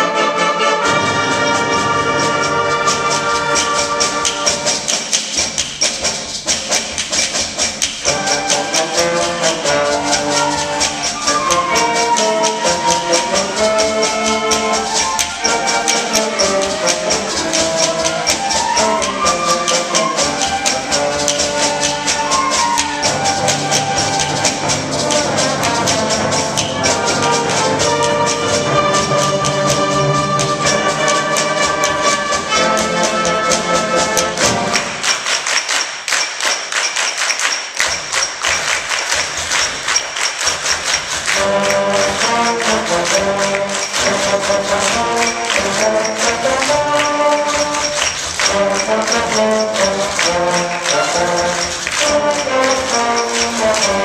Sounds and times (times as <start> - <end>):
Classical music: 0.0 - 54.0
Orchestra: 0.0 - 54.0.